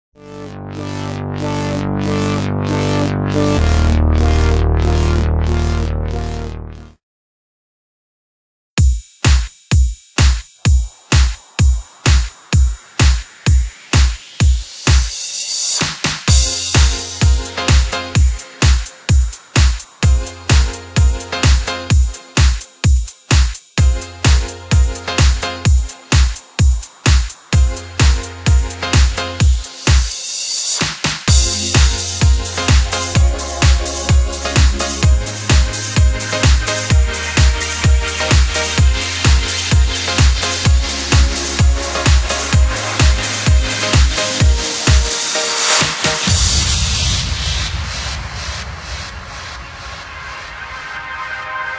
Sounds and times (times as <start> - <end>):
Music: 0.2 - 7.0, 8.8 - 51.7.